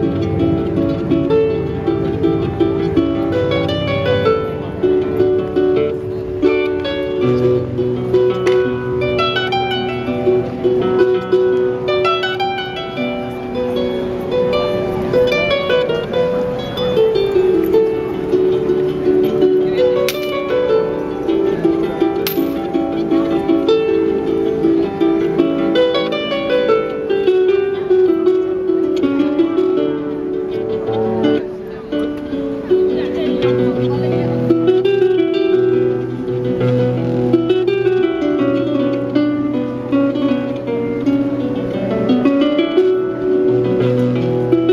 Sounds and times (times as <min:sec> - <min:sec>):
Harp: 0:00.0 - 0:44.7
Speech: 0:31.4 - 0:34.8.